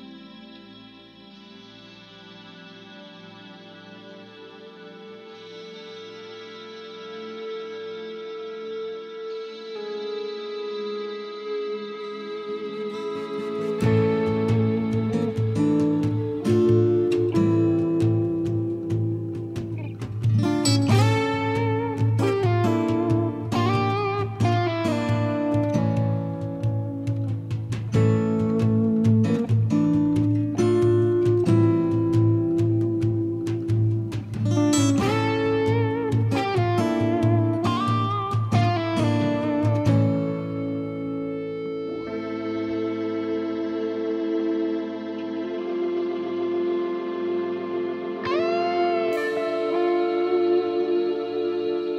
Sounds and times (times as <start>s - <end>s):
Music: 0.0s - 51.9s.